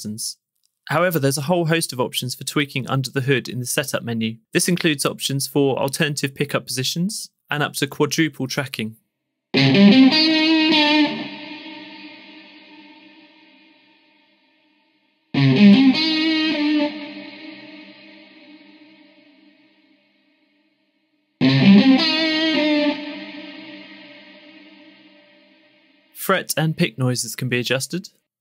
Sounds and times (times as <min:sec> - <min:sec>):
Speech: 0:00.0 - 0:09.0, 0:26.2 - 0:28.2
Electric guitar: 0:09.6 - 0:14.2, 0:15.4 - 0:19.7, 0:21.4 - 0:25.9.